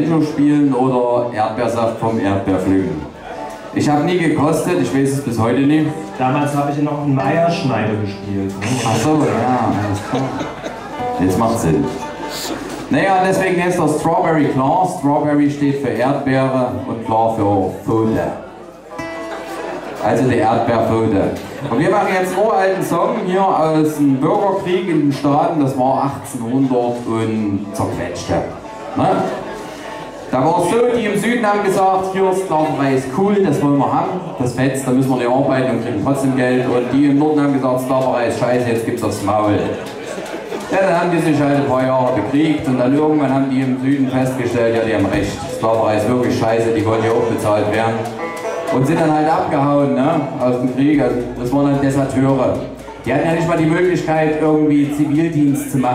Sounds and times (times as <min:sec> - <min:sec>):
Speech: 0:00.0 - 0:18.5, 0:20.0 - 0:29.5, 0:30.3 - 0:39.9, 0:40.6 - 0:55.9
Music: 0:00.0 - 0:55.9.